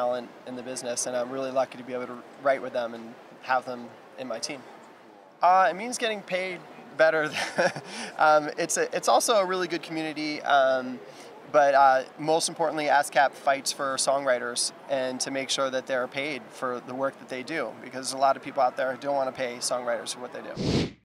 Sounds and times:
Speech: 0.0s - 4.7s, 5.4s - 7.4s, 8.2s - 20.6s.

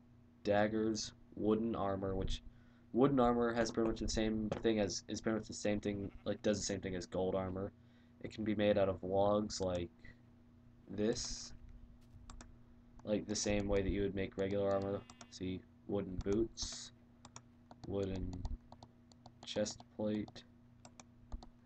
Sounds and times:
Speech: 0.4s - 9.9s, 10.9s - 11.6s, 13.0s - 17.0s, 17.9s - 18.5s, 19.5s - 20.5s.

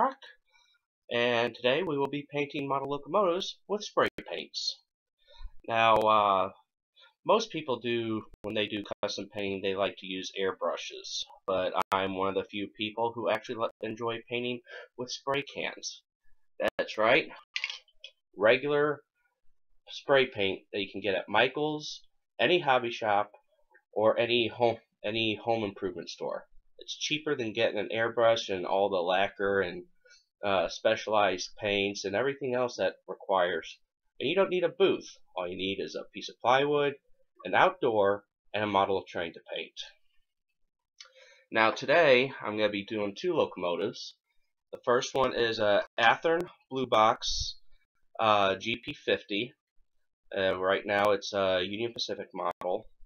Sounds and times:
Speech: 0.0s - 0.4s, 1.1s - 4.9s, 5.6s - 17.8s, 18.4s - 19.1s, 19.9s - 40.0s, 41.5s - 49.6s, 50.3s - 53.0s.

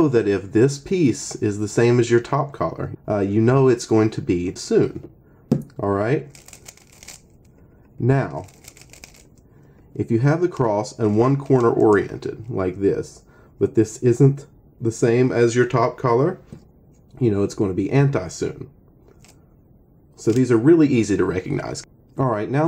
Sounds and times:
Speech: 0.0s - 5.1s, 5.8s - 6.3s, 8.0s - 8.5s, 10.0s - 16.6s, 17.2s - 18.7s, 20.2s - 22.6s.

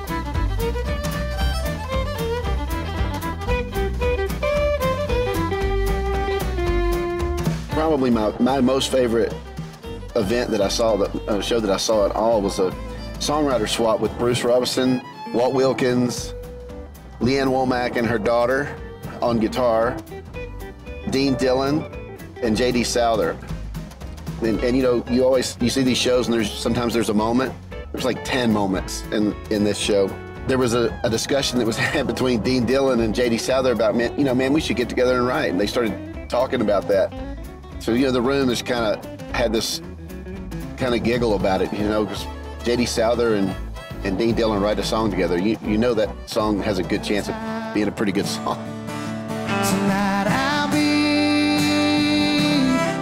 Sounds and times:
Blues: 0.0s - 53.0s
Speech: 7.7s - 9.4s, 10.2s - 16.4s, 17.2s - 20.0s, 21.1s - 23.5s, 24.4s - 37.2s, 37.8s - 39.8s, 40.8s - 48.6s.

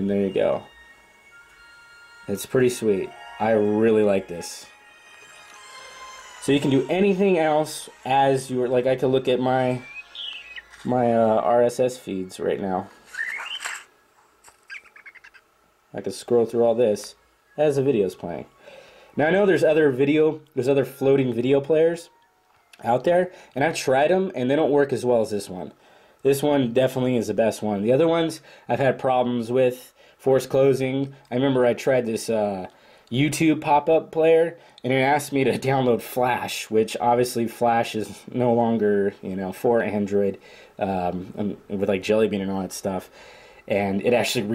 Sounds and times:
Speech: 0.0s - 0.7s, 2.3s - 4.7s, 6.4s - 9.8s, 10.8s - 12.9s, 15.9s - 18.5s, 19.2s - 22.1s, 22.8s - 43.1s, 43.7s - 44.5s
Music: 0.0s - 12.5s, 17.1s - 23.9s
Inside, small room: 0.0s - 44.5s
Bird: 9.7s - 10.9s, 13.1s - 13.9s, 14.5s - 15.5s.

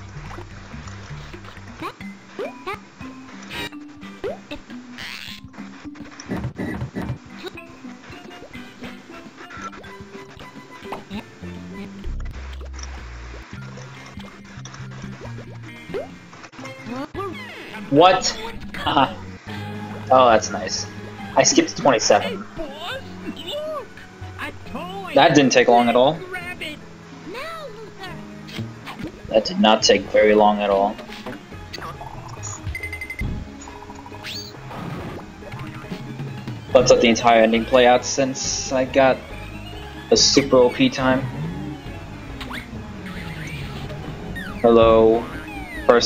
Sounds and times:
Music: 0.0s - 46.0s.

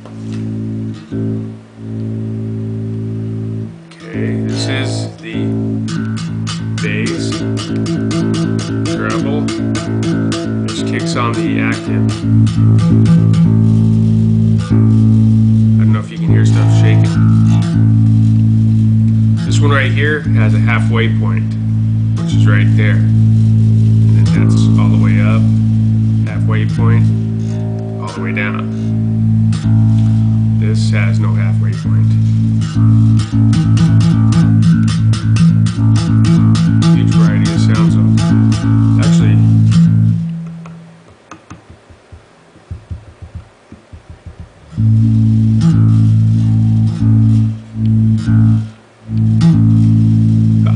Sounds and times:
Bass guitar: 0.0s - 50.7s
Speech: 3.9s - 5.6s, 6.8s - 7.4s, 8.8s - 9.5s, 10.7s - 12.1s, 15.8s - 17.3s, 19.4s - 21.6s, 22.3s - 23.1s, 24.1s - 25.5s, 26.2s - 27.2s, 28.0s - 28.9s, 30.6s - 32.2s, 36.8s - 38.2s, 39.0s - 39.5s.

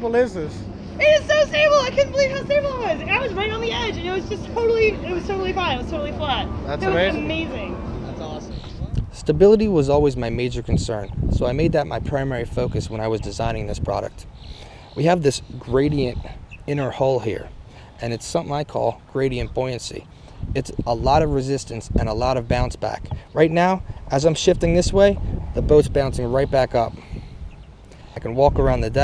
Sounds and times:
Vehicle: 0.0s - 29.0s.

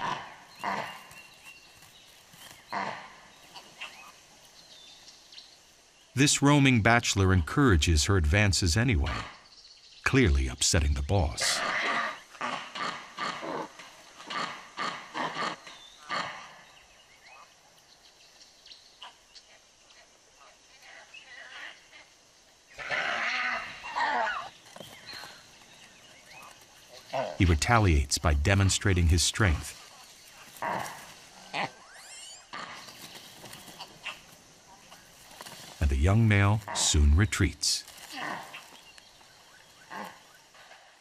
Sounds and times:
Animal: 0.0s - 1.8s, 2.4s - 4.2s, 8.8s - 9.5s, 11.2s - 17.6s, 19.0s - 27.7s, 29.4s - 37.0s, 37.8s - 41.0s
Outside, rural or natural: 0.0s - 41.0s
Speech: 6.2s - 9.3s, 10.0s - 11.6s, 27.4s - 29.8s, 35.8s - 37.9s.

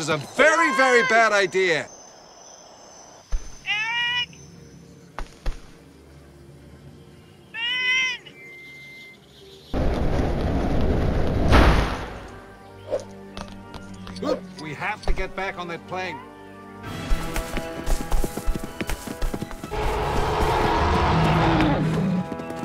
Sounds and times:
Music: 3.7s - 22.6s.

